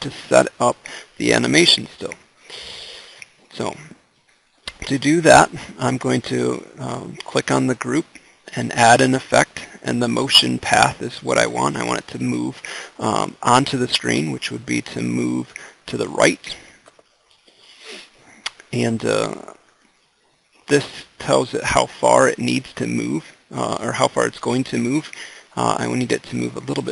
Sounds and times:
Speech: 0.0 - 2.2, 3.5 - 4.0, 4.7 - 16.8, 18.5 - 19.6, 20.7 - 26.9.

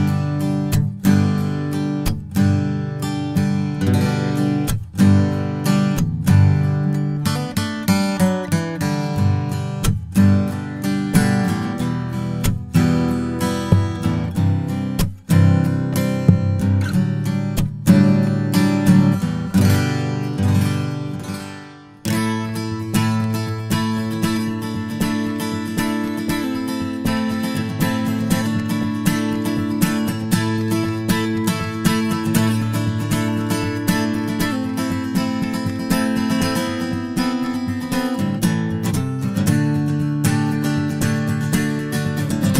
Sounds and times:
Acoustic guitar: 0.0 - 42.5
Strum: 0.0 - 42.5.

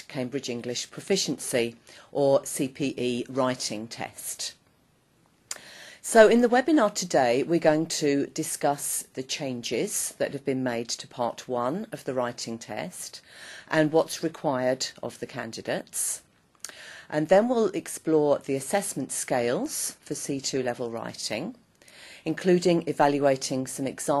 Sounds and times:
Speech: 0.0 - 4.6, 6.0 - 16.3, 17.1 - 21.6, 22.3 - 24.2.

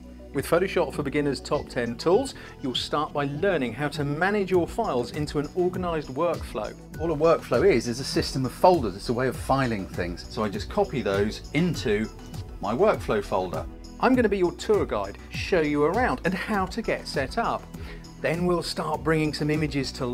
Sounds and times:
Music: 0.0 - 20.1
Speech: 0.4 - 20.1.

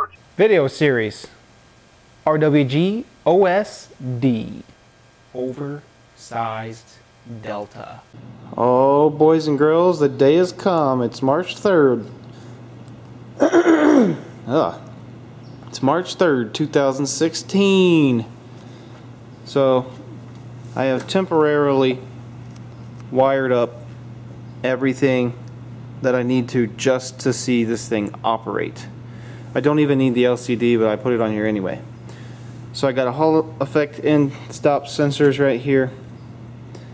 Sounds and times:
Speech: 0.4 - 1.4, 2.2 - 4.7, 5.4 - 12.2, 14.5 - 14.9, 15.7 - 18.3, 19.4 - 20.0, 20.8 - 22.1, 23.1 - 23.8, 24.6 - 25.4, 26.0 - 29.0, 29.6 - 31.9, 32.7 - 36.0.

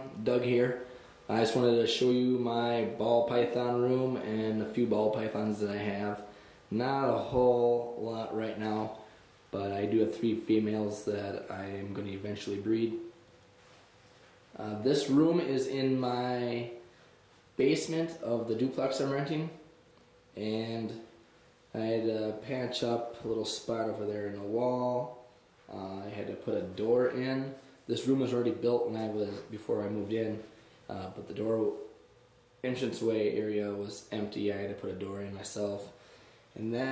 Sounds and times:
Speech: 0.0 - 13.1, 14.5 - 16.9, 17.6 - 19.6, 20.4 - 32.0, 32.6 - 36.0, 36.6 - 36.9.

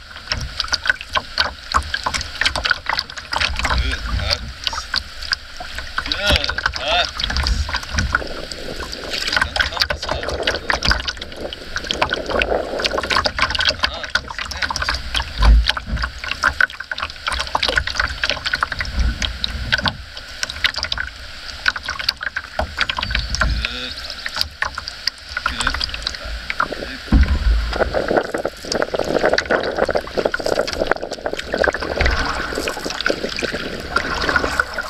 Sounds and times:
Rowboat, canoe, kayak: 0.0 - 34.8.

